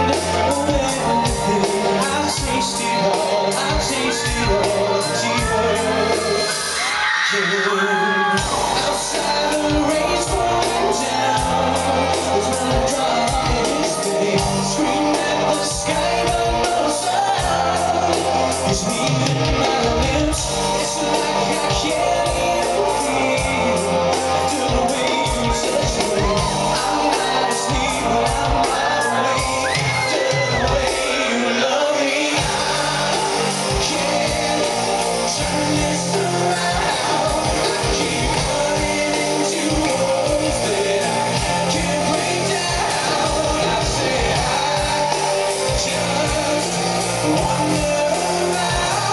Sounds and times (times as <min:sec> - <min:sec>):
Inside, large room or hall: 0:00.0 - 0:49.1
Music: 0:00.0 - 0:49.1
Singing: 0:00.0 - 0:49.1.